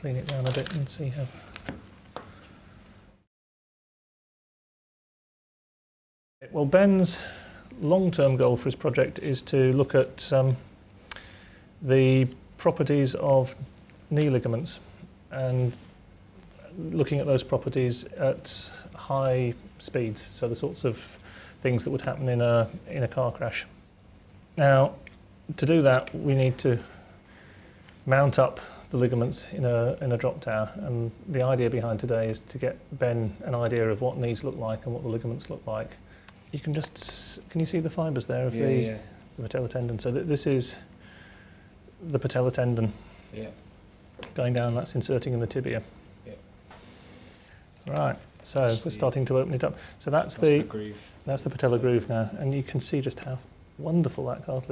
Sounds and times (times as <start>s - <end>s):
Speech: 0.0s - 1.4s, 6.4s - 10.7s, 11.8s - 15.8s, 16.6s - 23.8s, 24.6s - 26.9s, 28.1s - 40.9s, 42.0s - 43.6s, 44.3s - 46.4s, 47.8s - 54.7s.